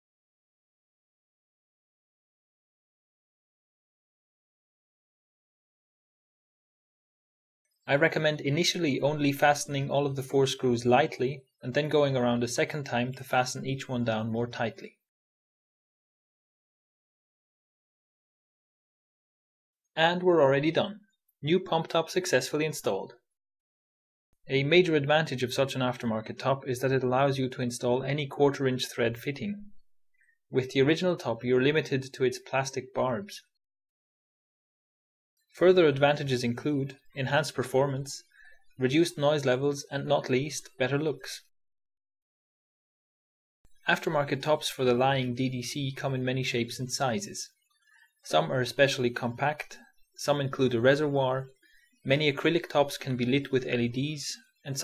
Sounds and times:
Speech: 0:07.9 - 0:15.1, 0:20.0 - 0:23.3, 0:24.5 - 0:29.8, 0:30.5 - 0:33.6, 0:35.6 - 0:41.5, 0:43.8 - 0:47.6, 0:48.2 - 0:54.8.

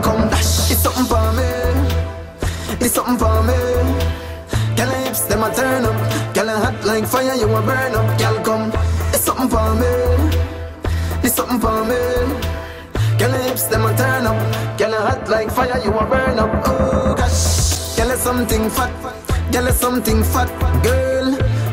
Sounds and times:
Music: 0:00.0 - 0:21.7.

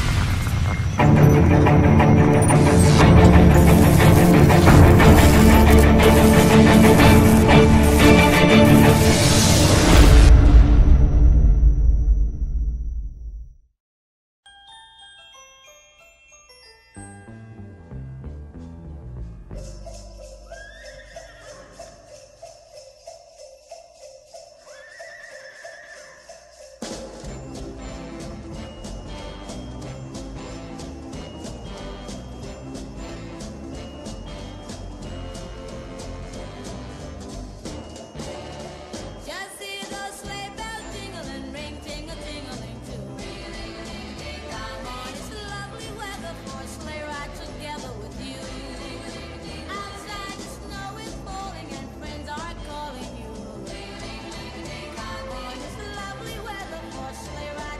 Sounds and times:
Glockenspiel: 0:00.5 - 0:09.1, 0:14.4 - 0:57.7.

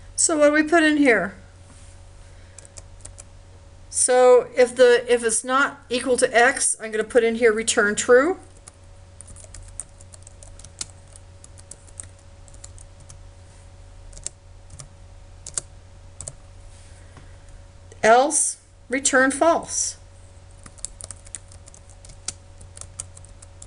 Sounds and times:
Inside, small room: 0:00.0 - 0:23.6
Speech: 0:00.2 - 0:01.4, 0:03.9 - 0:08.5, 0:18.0 - 0:20.0.

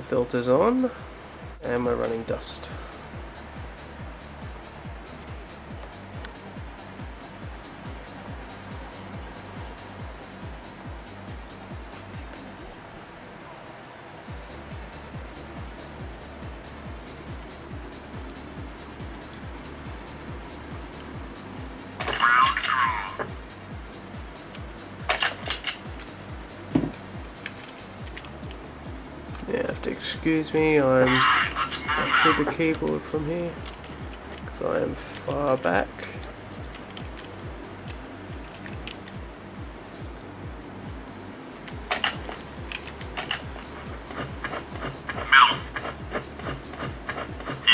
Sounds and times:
Speech: 0:00.0 - 0:01.0, 0:01.6 - 0:02.8, 0:22.0 - 0:23.3, 0:29.4 - 0:33.6, 0:34.5 - 0:36.2, 0:45.3 - 0:45.7
Music: 0:00.0 - 0:47.7.

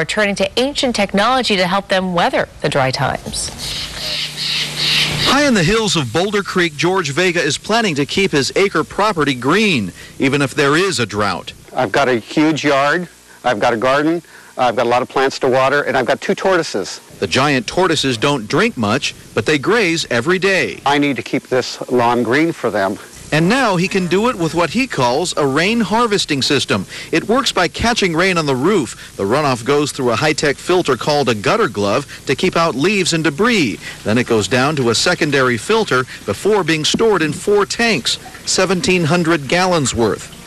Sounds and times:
Speech: 0:05.3 - 0:40.3.

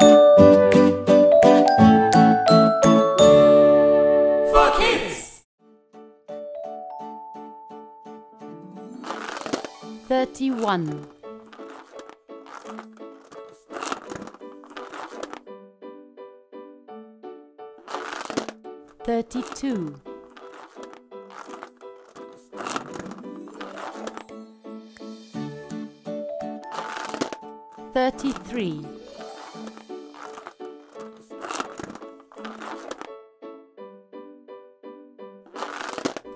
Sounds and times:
Music for children: 0:00.0 - 0:04.5, 0:05.7 - 0:36.3
Speech: 0:04.5 - 0:05.4, 0:10.1 - 0:11.1, 0:19.0 - 0:20.0, 0:27.9 - 0:29.0.

